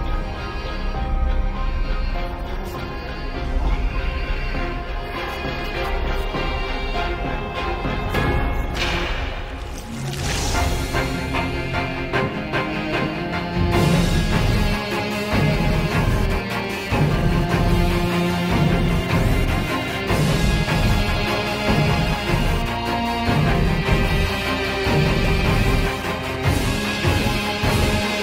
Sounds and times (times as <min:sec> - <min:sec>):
Violin, fiddle: 0:00.0 - 0:08.8.